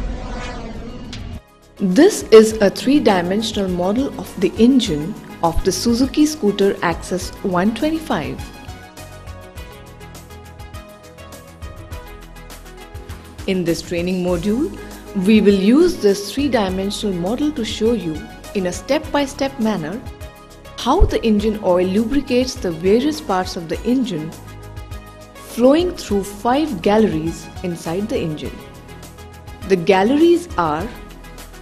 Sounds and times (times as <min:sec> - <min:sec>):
Music: 0:00.5 - 0:31.6
Speech: 0:01.8 - 0:08.5, 0:13.5 - 0:20.1, 0:20.8 - 0:24.3, 0:25.5 - 0:28.6, 0:29.7 - 0:31.0.